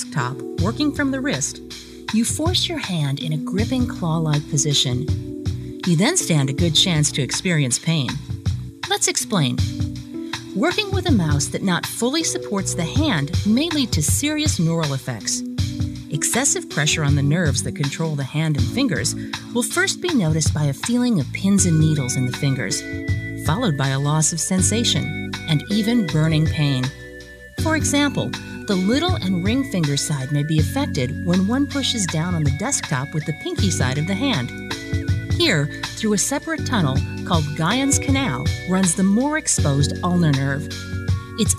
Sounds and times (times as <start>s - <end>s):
Speech: 0.0s - 5.1s, 5.8s - 8.3s, 8.9s - 9.7s, 10.6s - 15.5s, 16.1s - 27.0s, 27.6s - 34.6s, 35.4s - 40.7s
Music: 0.0s - 41.5s.